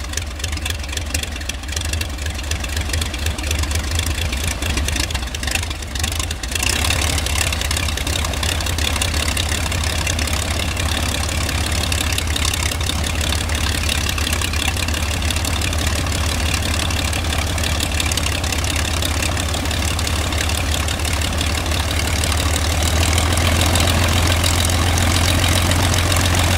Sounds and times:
Aircraft: 0.0s - 26.5s
Idling: 0.0s - 26.5s.

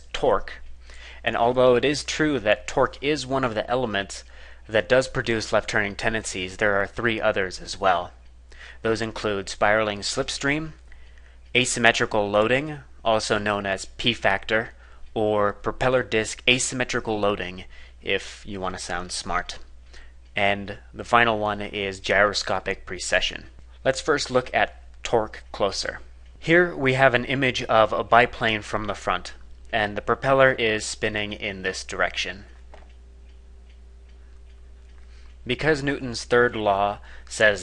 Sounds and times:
Speech: 0.0s - 0.6s, 1.2s - 8.2s, 8.8s - 10.8s, 11.5s - 19.7s, 20.4s - 32.6s, 35.4s - 37.6s.

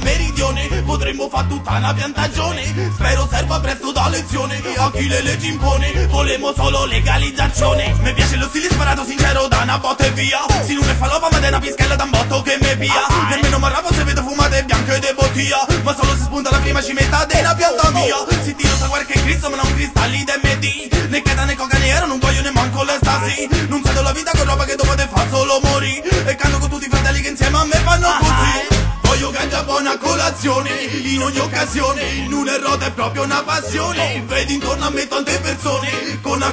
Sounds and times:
Music: 0.0s - 36.5s.

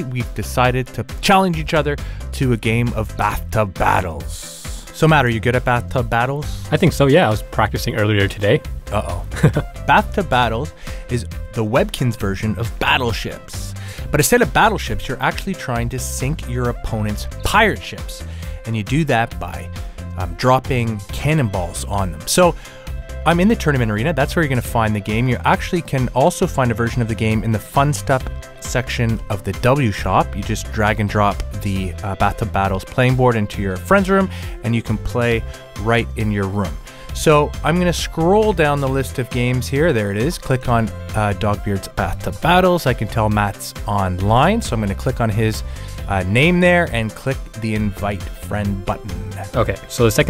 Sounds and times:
Speech: 0.0s - 22.6s, 23.2s - 50.3s
Music: 0.0s - 50.3s.

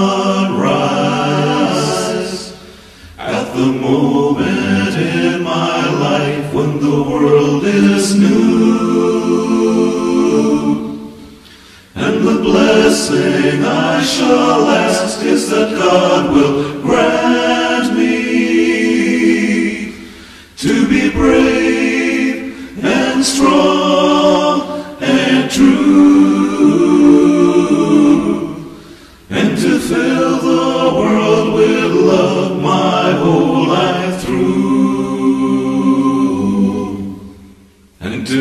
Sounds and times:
Chant: 0.0s - 11.4s, 12.0s - 38.4s.

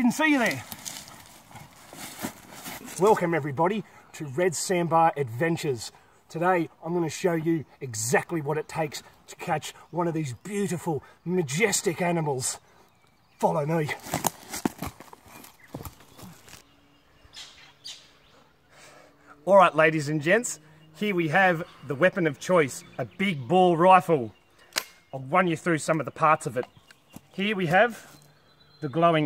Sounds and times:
Speech: 0.0s - 0.6s, 2.9s - 12.6s, 13.4s - 14.0s, 19.4s - 24.4s, 25.2s - 26.7s, 27.4s - 28.0s, 28.8s - 29.2s
Outside, rural or natural: 0.0s - 29.2s
Chirp, tweet: 6.9s - 14.3s, 15.0s - 29.2s.

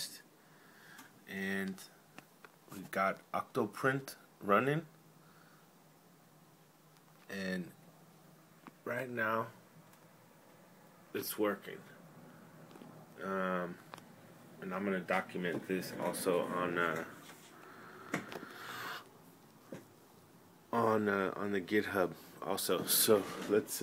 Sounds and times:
Speech: 0.0s - 0.3s, 1.3s - 2.0s, 2.7s - 4.9s, 7.3s - 7.8s, 8.8s - 9.6s, 11.1s - 12.0s, 13.2s - 13.8s, 14.6s - 17.2s, 20.7s - 23.8s.

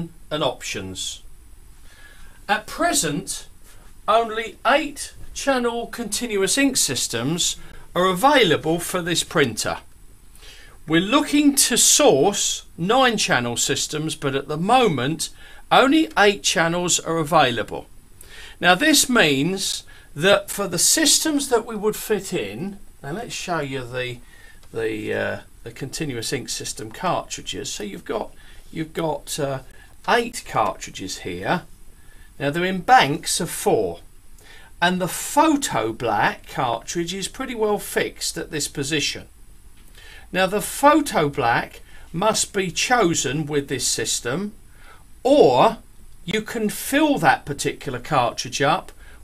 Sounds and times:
Speech: 0.0s - 1.3s, 2.5s - 9.9s, 10.9s - 17.9s, 18.6s - 31.7s, 32.4s - 34.1s, 34.8s - 39.3s, 40.3s - 44.6s, 45.2s - 49.0s.

